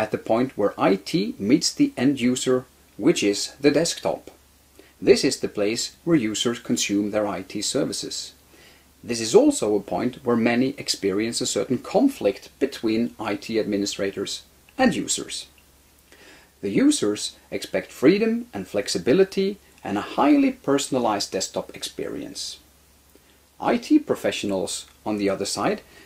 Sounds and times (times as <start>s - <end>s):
Speech: 0.0s - 4.4s, 5.0s - 8.4s, 9.0s - 15.6s, 16.6s - 22.6s, 23.6s - 25.9s.